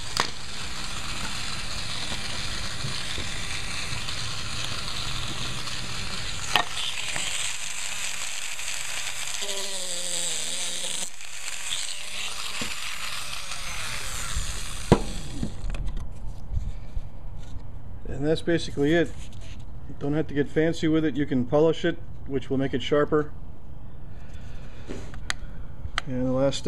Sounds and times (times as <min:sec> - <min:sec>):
Wood: 0:00.0 - 0:15.8
Tools: 0:06.5 - 0:07.7.